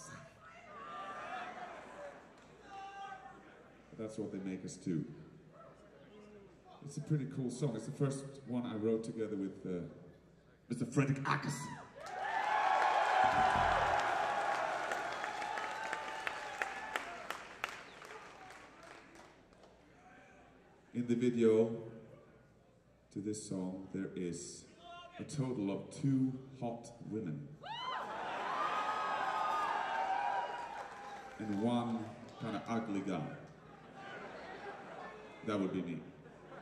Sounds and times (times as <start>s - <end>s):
Speech: 2.6s - 5.3s, 5.9s - 10.1s, 10.7s - 11.8s, 20.0s - 22.0s, 23.1s - 27.5s, 31.4s - 33.5s, 35.2s - 36.2s.